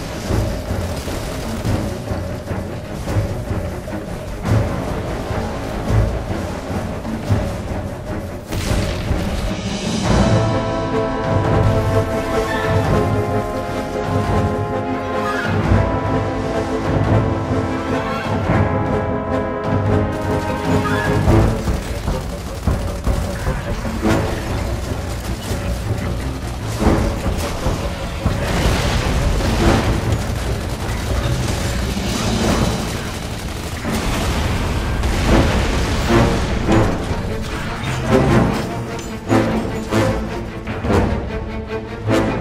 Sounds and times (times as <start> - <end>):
Music: 0.0 - 42.4.